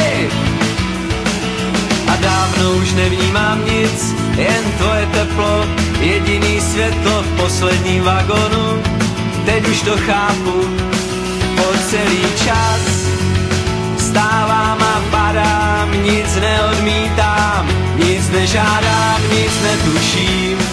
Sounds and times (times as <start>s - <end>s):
Music: 0.0s - 20.7s.